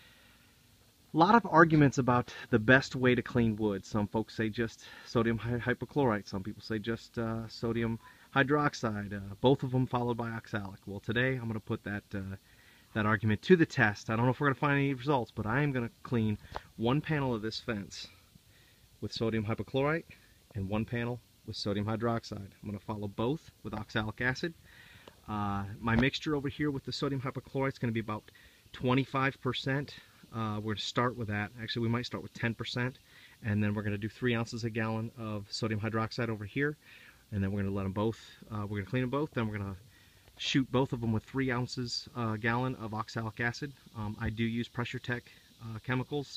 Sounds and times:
Speech: 1.1s - 18.2s, 19.0s - 24.6s, 25.2s - 39.8s, 40.4s - 46.3s.

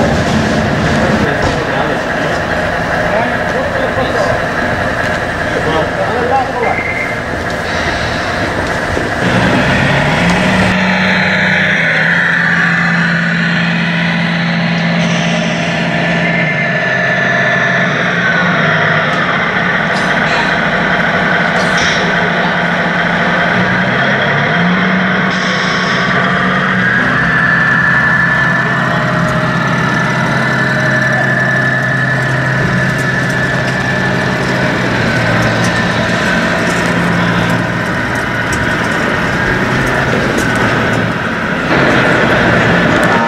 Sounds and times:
Truck: 0.0s - 43.2s.

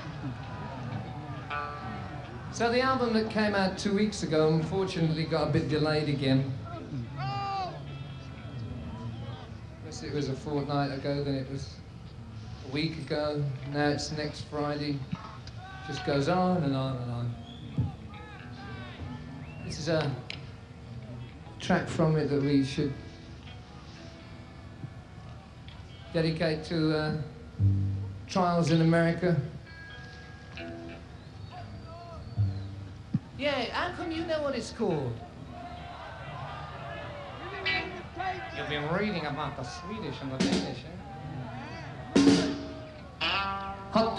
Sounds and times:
Speech: 2.5s - 7.9s, 12.7s - 20.3s, 21.2s - 23.0s, 26.0s - 27.4s, 28.3s - 29.6s, 37.4s - 41.0s.

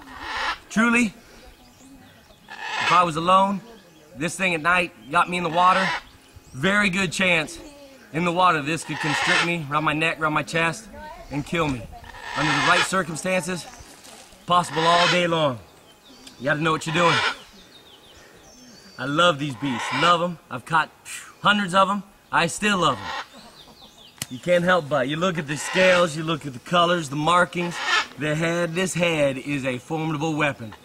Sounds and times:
Outside, rural or natural: 0.0s - 30.8s
Animal: 8.8s - 9.6s, 12.0s - 13.1s, 19.5s - 20.2s.

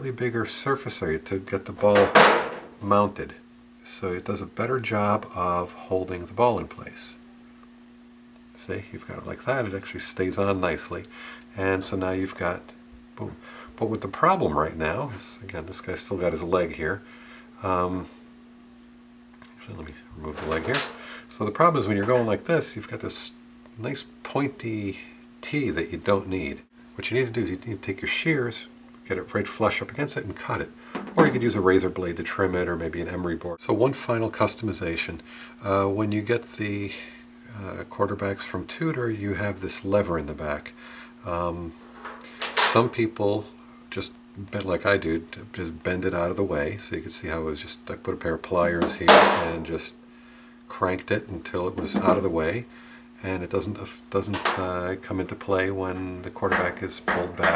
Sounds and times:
Speech: 0.0s - 7.2s, 8.6s - 17.0s, 17.6s - 18.2s, 19.5s - 41.8s, 42.6s - 50.0s, 50.7s - 57.5s
Inside, small room: 0.0s - 57.5s.

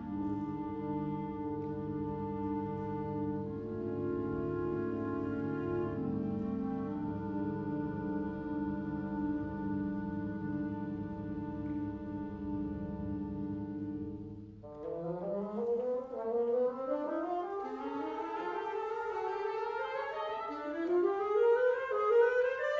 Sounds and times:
String section: 0.0s - 22.7s.

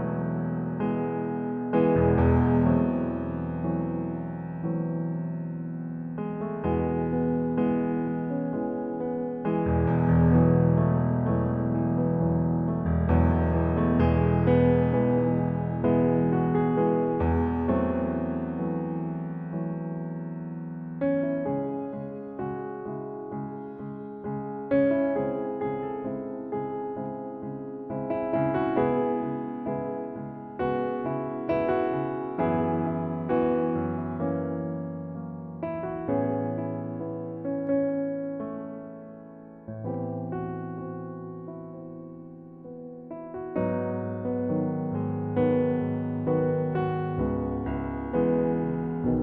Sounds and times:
Music: 0.0s - 49.2s.

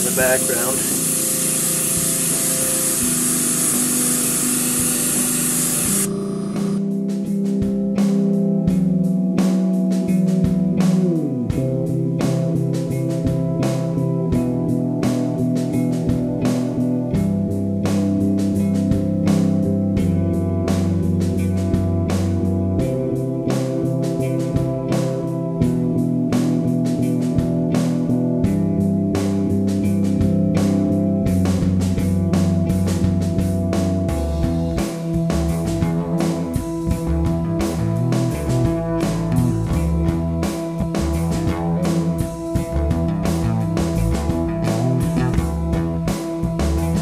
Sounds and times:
Music: 0.0s - 47.0s.

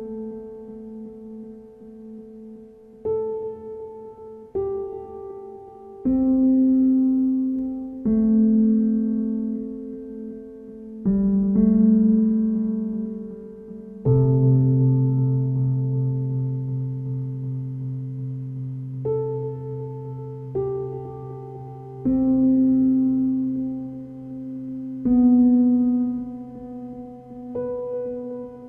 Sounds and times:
Music: 0.0s - 28.6s.

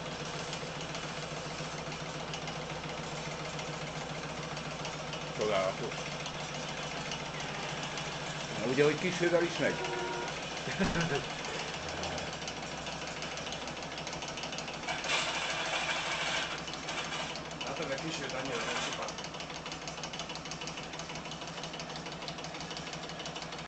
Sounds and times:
Engine: 0.0s - 23.6s
Speech: 5.4s - 6.0s, 8.5s - 9.8s, 17.6s - 19.2s.

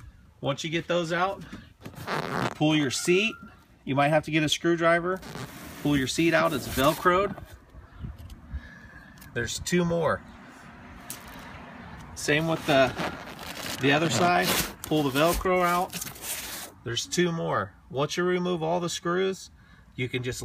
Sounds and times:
Speech: 0.4s - 1.4s, 2.6s - 5.2s, 5.8s - 7.4s, 9.4s - 10.2s, 12.2s - 13.0s, 13.8s - 15.9s, 16.8s - 20.4s.

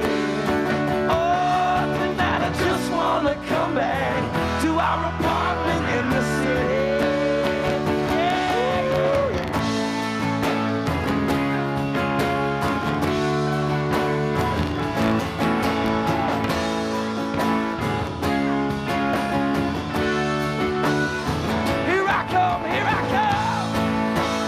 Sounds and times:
Music: 0.0s - 24.4s.

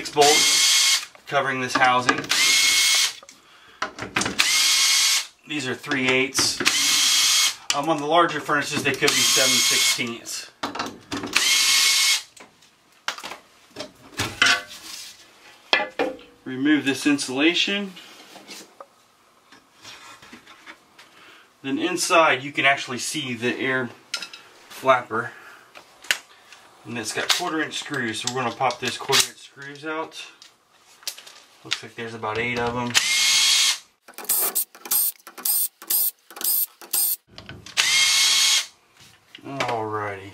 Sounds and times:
Speech: 0.0s - 0.5s, 1.3s - 2.3s, 5.5s - 6.6s, 7.7s - 10.6s, 16.4s - 18.0s, 21.6s - 24.0s, 24.8s - 25.4s, 26.8s - 30.4s, 31.6s - 33.0s, 39.4s - 40.3s.

